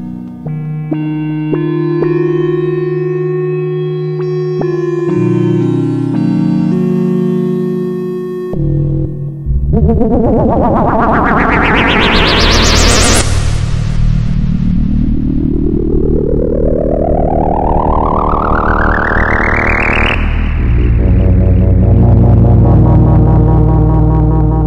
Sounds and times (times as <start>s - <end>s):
Synthesizer: 0.0s - 24.6s.